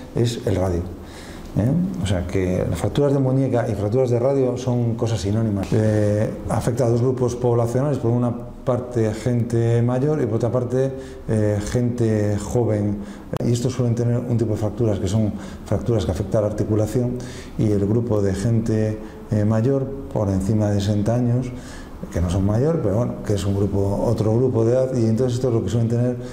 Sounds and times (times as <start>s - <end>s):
Speech: 0.2s - 1.0s, 1.6s - 26.3s.